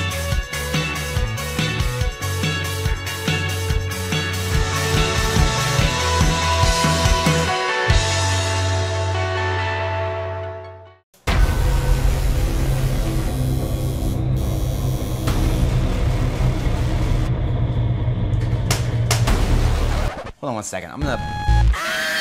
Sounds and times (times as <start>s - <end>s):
Exciting music: 0.0s - 9.9s, 11.3s - 18.0s.